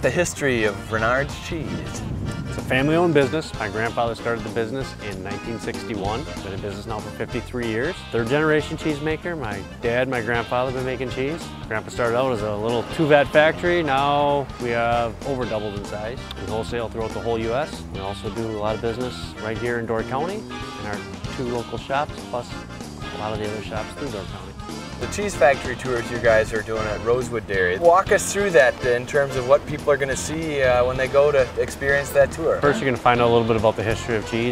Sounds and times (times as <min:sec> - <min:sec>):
Speech: 0:00.0 - 0:02.0, 0:02.6 - 0:22.6, 0:23.2 - 0:34.5
Music: 0:00.0 - 0:34.5.